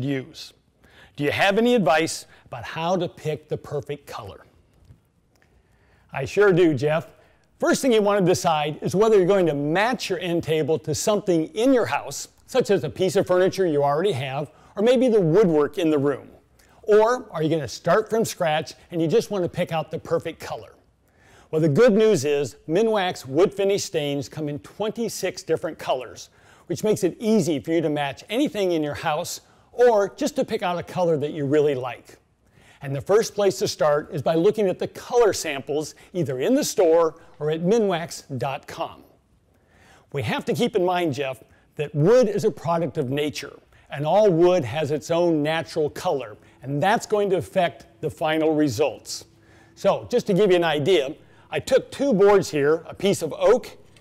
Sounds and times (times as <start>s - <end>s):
Speech: 0.0s - 0.6s, 1.2s - 4.5s, 6.1s - 20.8s, 21.5s - 32.2s, 32.8s - 39.2s, 40.1s - 53.8s.